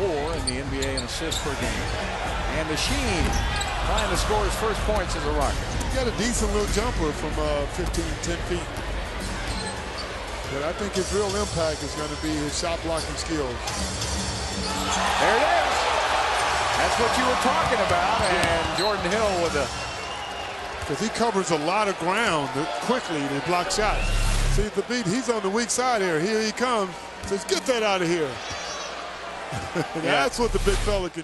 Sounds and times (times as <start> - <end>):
Speech: 0.0 - 1.8, 2.5 - 8.7, 10.5 - 13.6, 16.8 - 19.7, 20.9 - 28.4, 30.0 - 31.2
Music: 0.2 - 18.3, 23.7 - 24.7, 30.3 - 31.1.